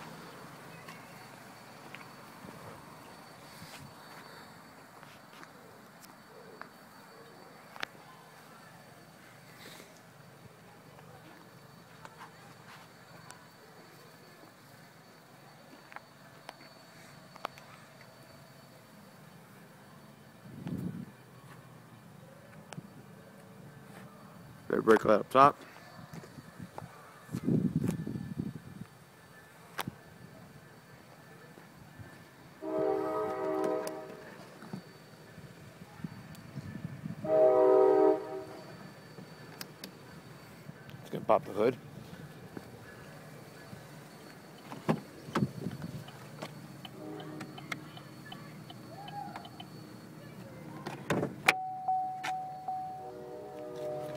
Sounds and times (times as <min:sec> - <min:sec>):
Train horn: 0:32.6 - 0:34.4, 0:37.2 - 0:38.8, 0:46.9 - 0:47.6, 0:52.9 - 0:54.1.